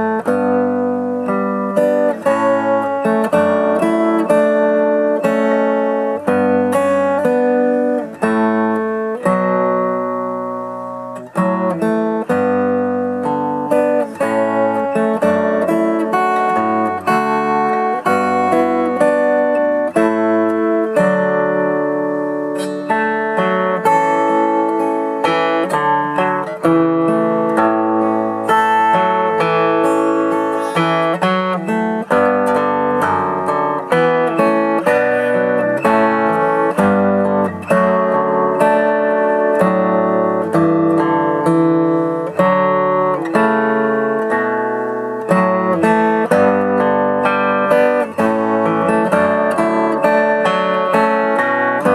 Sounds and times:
Guitar: 0:00.0 - 0:51.9.

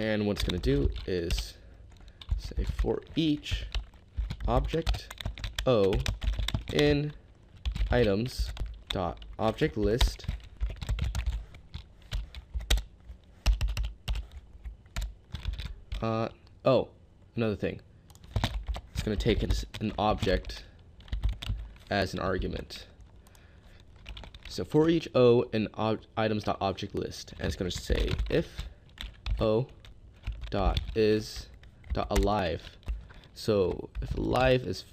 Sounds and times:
Typing: 0:00.0 - 0:14.4, 0:15.0 - 0:16.1, 0:18.1 - 0:21.8, 0:24.0 - 0:24.6, 0:27.3 - 0:34.2.

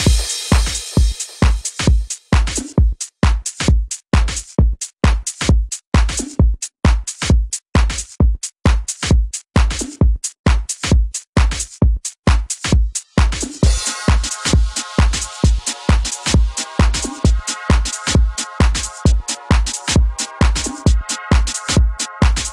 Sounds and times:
House music: 0:00.0 - 0:02.8, 0:12.3 - 0:22.5.

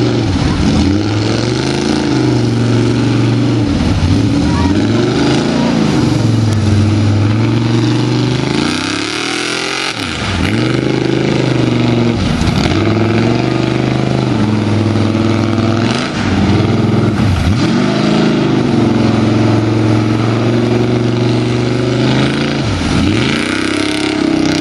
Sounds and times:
Truck: 0:00.0 - 0:24.6.

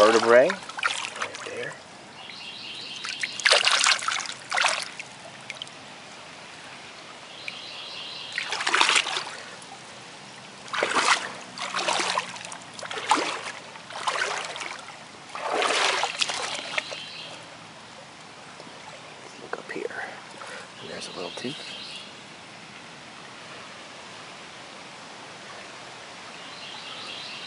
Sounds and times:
Environmental noise: 0:00.0 - 0:27.4
Bird vocalization, bird call, bird song: 0:02.1 - 0:03.7, 0:07.3 - 0:08.9, 0:16.3 - 0:17.4, 0:20.4 - 0:22.2, 0:26.3 - 0:27.4.

